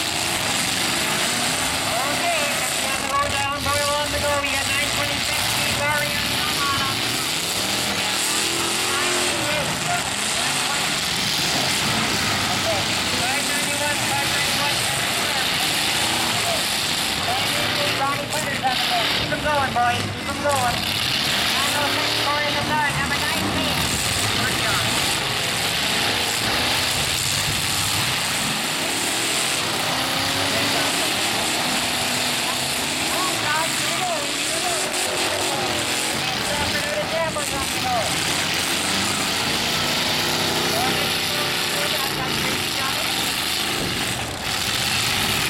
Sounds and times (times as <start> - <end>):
Truck: 0.0 - 45.4
Speech: 1.9 - 7.1, 8.8 - 11.0, 12.4 - 20.8, 21.4 - 25.0, 32.4 - 38.2, 40.6 - 43.2.